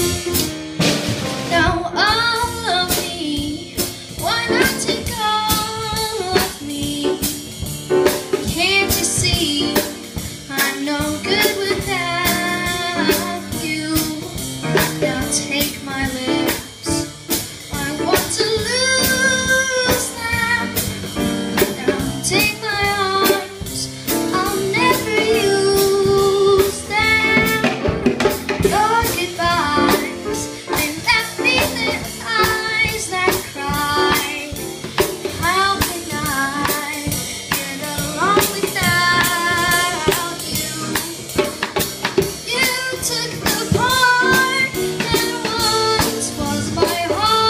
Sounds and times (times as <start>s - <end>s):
Musical instrument: 0.0s - 47.4s
Child singing: 1.5s - 7.4s, 8.4s - 9.9s, 10.5s - 17.1s, 17.7s - 20.8s, 21.6s - 27.8s, 28.6s - 34.6s, 35.3s - 41.6s, 42.2s - 47.4s.